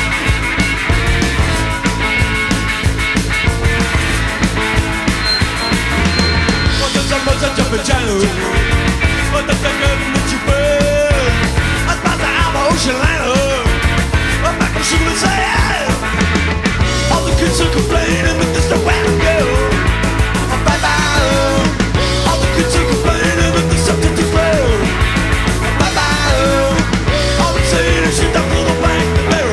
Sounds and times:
Music: 0.0 - 29.5.

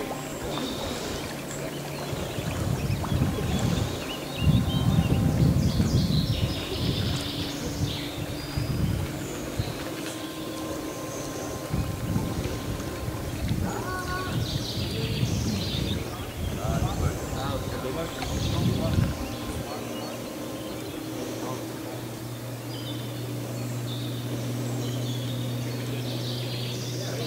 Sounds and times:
Boat, Water vehicle: 0.0 - 27.2
Environmental noise: 0.0 - 27.2.

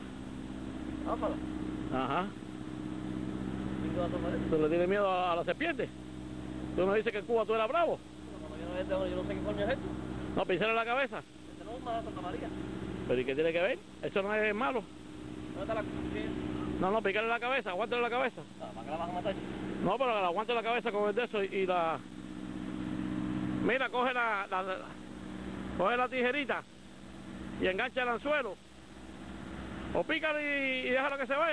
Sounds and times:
Outside, rural or natural: 0.0 - 31.5
Outside, urban or manmade: 0.0 - 31.5
Speech: 1.0 - 2.4, 3.8 - 5.9, 6.8 - 14.9, 15.6 - 22.0, 23.6 - 25.0, 25.8 - 26.7, 27.6 - 28.6, 29.9 - 31.5.

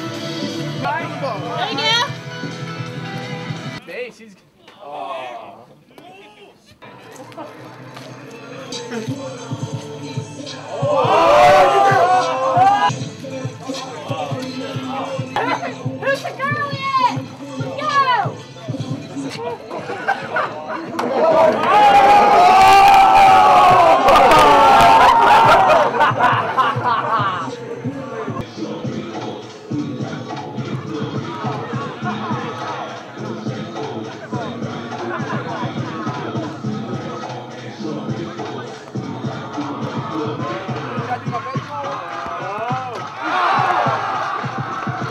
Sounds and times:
Music: 0.0 - 4.1, 6.1 - 45.1.

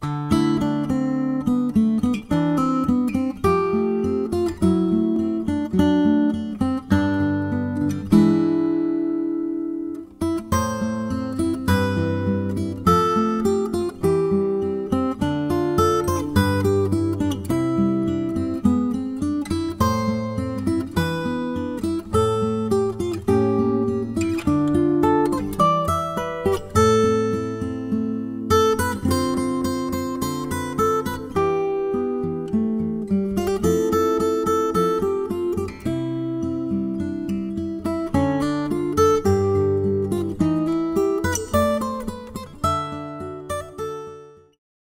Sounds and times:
Guitar: 0.0 - 44.6.

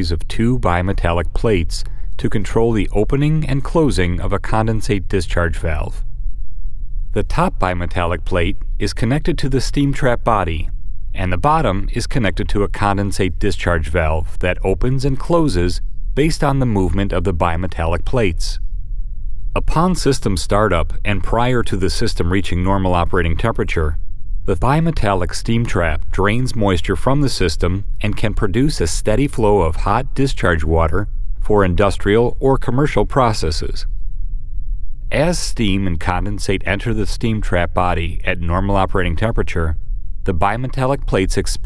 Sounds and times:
Speech: 0.0 - 6.0, 7.2 - 18.6, 19.6 - 33.9, 35.1 - 41.6.

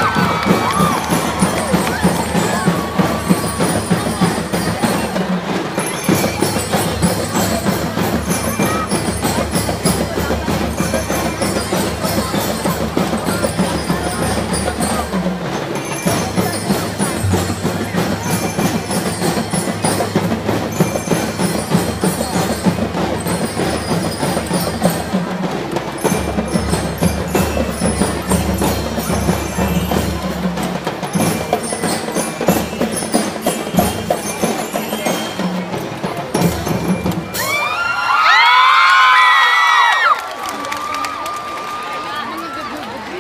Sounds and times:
Speech: 0.0 - 37.2, 40.2 - 43.2
Drum kit: 0.0 - 39.7.

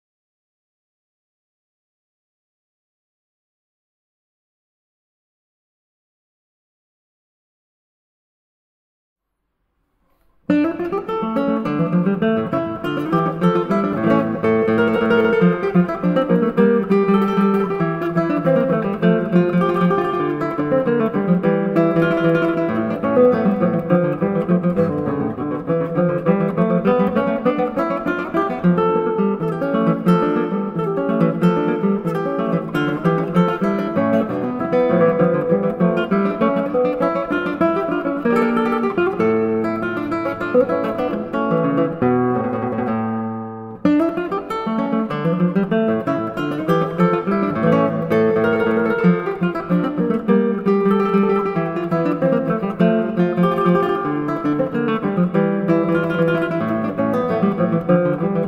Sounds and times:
Acoustic guitar: 9.9 - 58.4.

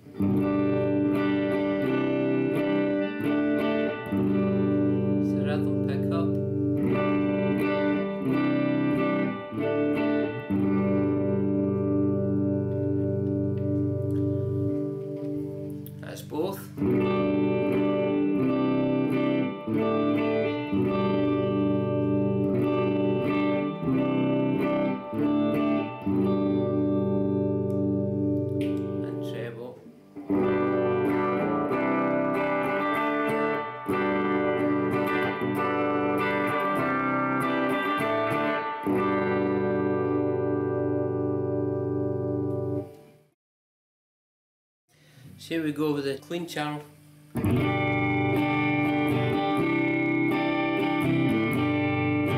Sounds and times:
Effects unit: 0.0 - 43.3, 47.0 - 52.3
Electric guitar: 0.0 - 43.3, 47.3 - 52.3.

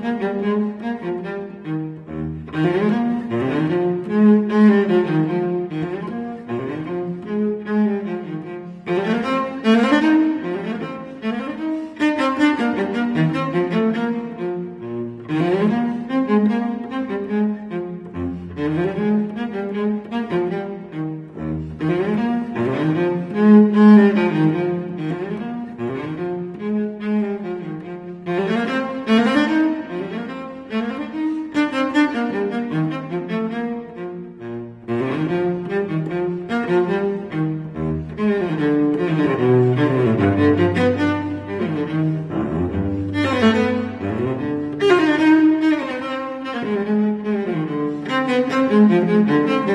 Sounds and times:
String section: 0.0 - 49.7.

